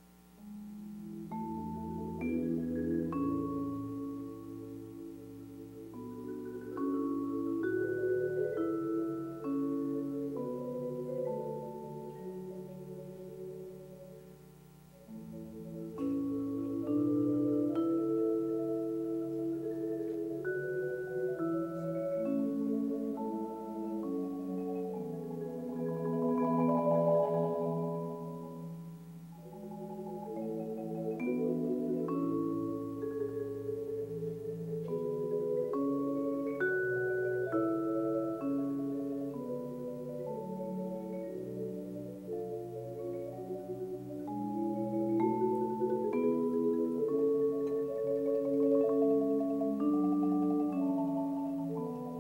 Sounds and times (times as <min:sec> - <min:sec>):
Tubular bells: 0:00.4 - 0:14.3, 0:15.0 - 0:52.2.